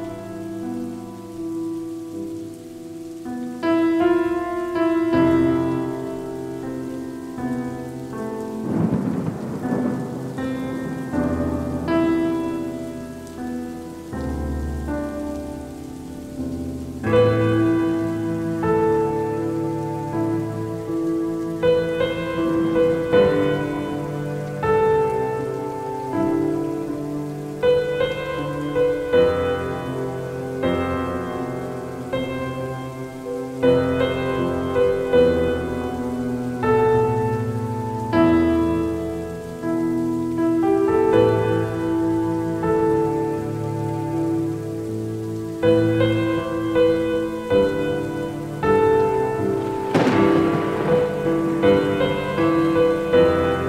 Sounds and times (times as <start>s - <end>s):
Music: 0.0s - 53.6s
Rain on surface: 0.0s - 53.6s.